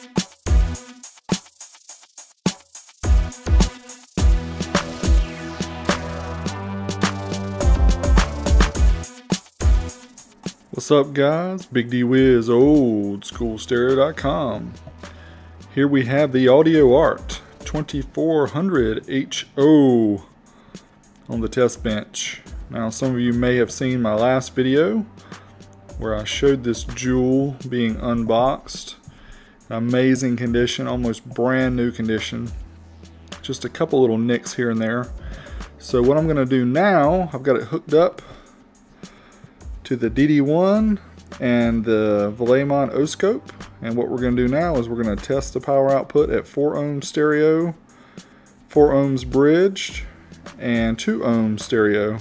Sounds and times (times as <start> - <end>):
Music: 0.0 - 52.2
Speech: 10.7 - 14.8, 15.7 - 20.3, 21.3 - 25.1, 26.0 - 29.0, 29.7 - 32.6, 33.4 - 35.1, 35.8 - 38.2, 39.8 - 47.8, 48.7 - 52.2.